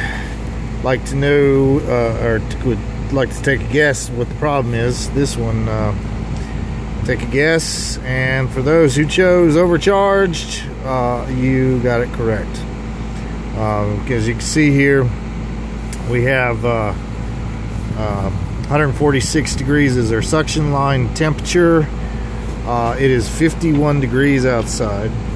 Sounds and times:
Speech: 0.8 - 6.0, 7.0 - 12.7, 13.5 - 15.2, 16.0 - 17.0, 18.0 - 22.0, 22.6 - 25.3.

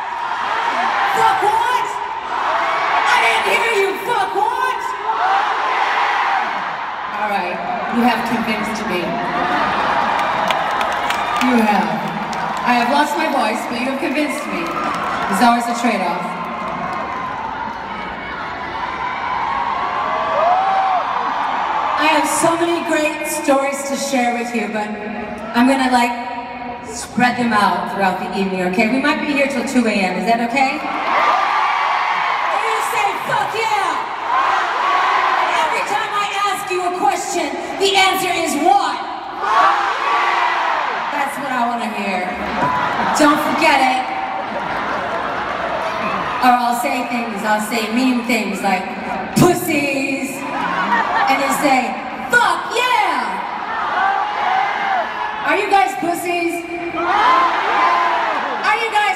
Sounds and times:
Female speech, woman speaking: 1.1 - 2.0, 3.1 - 5.0, 7.2 - 9.2, 11.4 - 16.3, 22.0 - 26.3, 26.9 - 30.8, 32.5 - 34.0, 35.5 - 39.0, 41.2 - 42.4, 43.2 - 44.1, 46.4 - 50.5, 51.3 - 53.4, 55.5 - 57.2, 58.6 - 59.1.

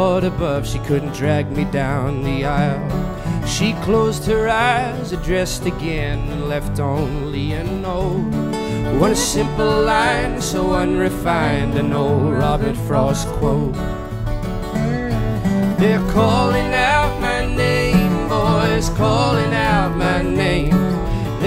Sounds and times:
Music: 0.0 - 21.4.

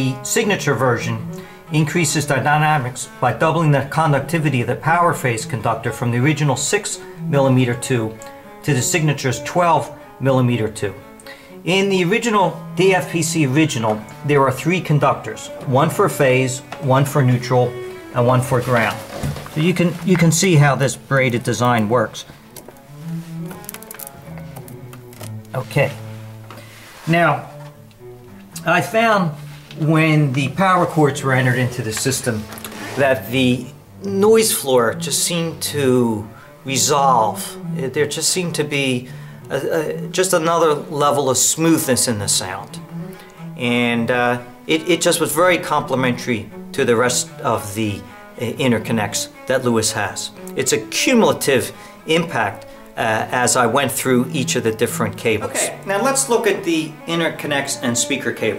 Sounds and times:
Speech: 0.0 - 11.0, 11.7 - 22.3, 25.5 - 26.0, 27.1 - 27.6, 28.6 - 42.8, 43.6 - 58.5
Music: 0.0 - 58.5.

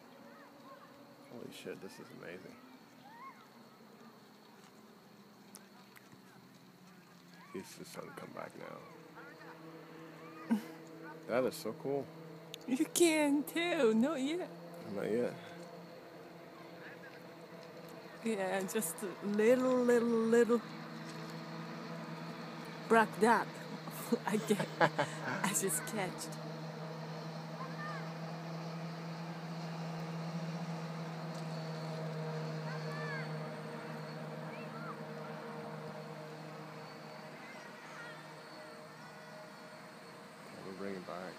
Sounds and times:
Outside, rural or natural: 0.0 - 41.3.

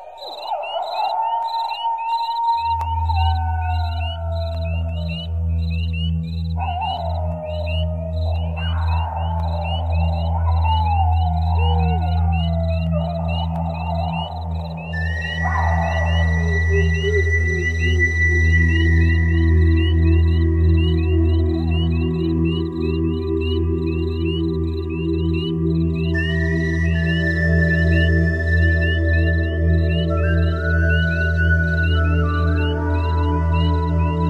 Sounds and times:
Animal: 0.0 - 34.3
Music: 0.0 - 34.3.

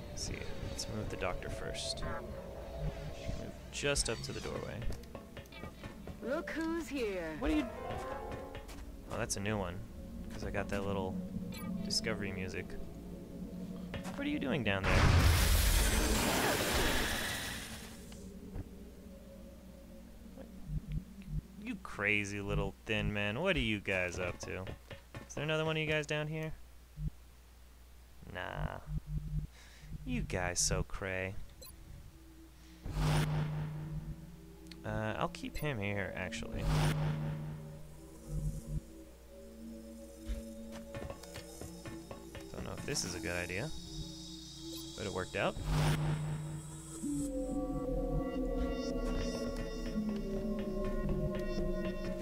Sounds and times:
Speech: 21.6 - 24.7, 28.3 - 28.8, 30.0 - 31.4, 42.6 - 43.7.

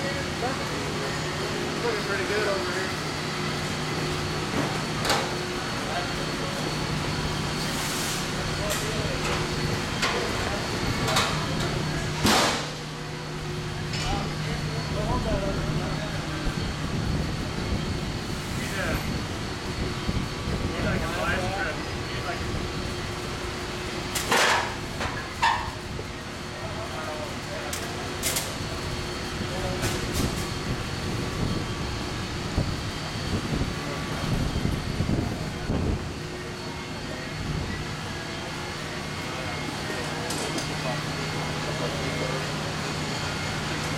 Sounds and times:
Speech: 0.0 - 3.0, 5.6 - 6.8, 8.4 - 12.2, 13.9 - 16.6, 18.5 - 19.2, 20.5 - 22.8, 26.4 - 30.6, 38.4 - 42.9.

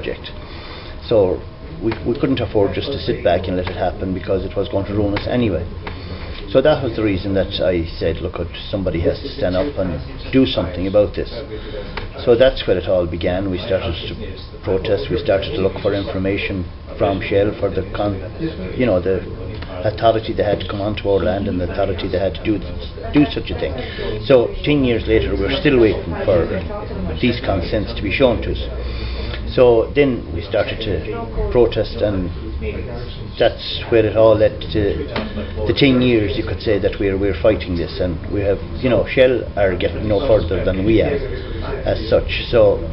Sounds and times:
Speech: 0.0 - 0.4, 1.0 - 42.9.

